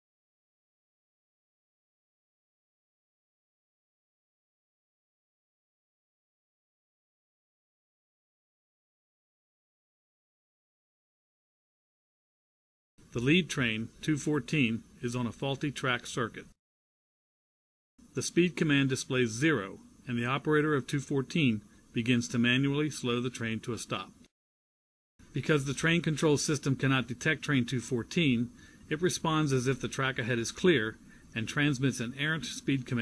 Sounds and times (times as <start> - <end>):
Speech: 13.1 - 16.6, 18.1 - 24.3, 25.3 - 33.0.